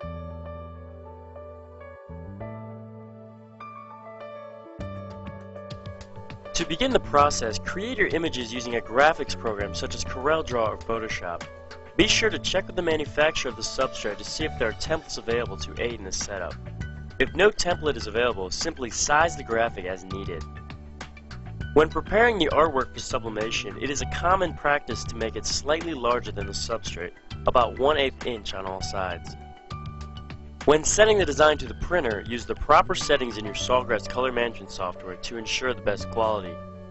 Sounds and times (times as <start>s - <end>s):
Music: 0.0s - 36.9s
Speech: 6.6s - 11.4s, 12.0s - 16.6s, 17.2s - 20.4s, 21.8s - 29.4s, 30.7s - 36.6s.